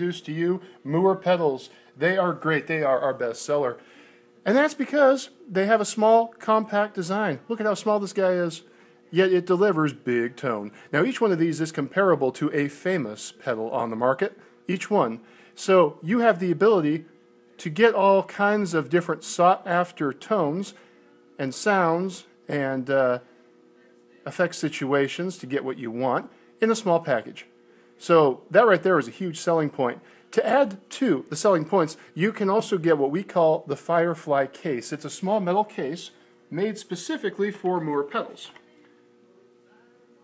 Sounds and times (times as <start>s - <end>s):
Speech: 0.0s - 3.8s, 4.4s - 23.3s, 23.9s - 40.2s.